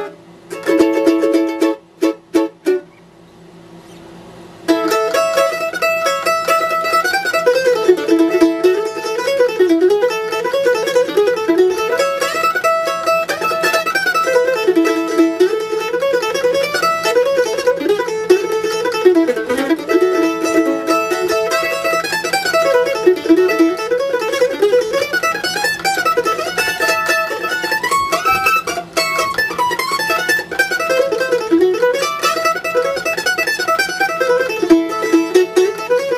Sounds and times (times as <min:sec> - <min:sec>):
Mandolin: 0:00.0 - 0:03.1, 0:04.6 - 0:36.1.